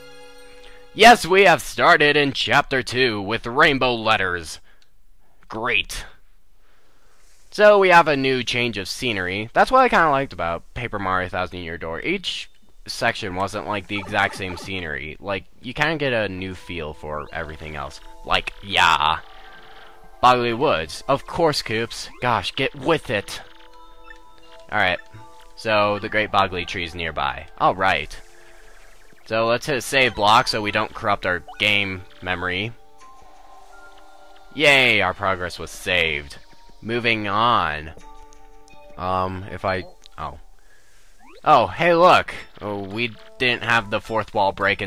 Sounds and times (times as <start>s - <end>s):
Music: 0.0s - 1.4s, 13.3s - 15.0s, 15.9s - 44.8s
Speech: 1.0s - 4.6s, 5.5s - 6.2s, 7.6s - 19.2s, 20.2s - 23.4s, 24.7s - 25.0s, 25.6s - 28.2s, 29.3s - 32.8s, 34.6s - 38.0s, 39.0s - 40.4s, 41.5s - 44.8s.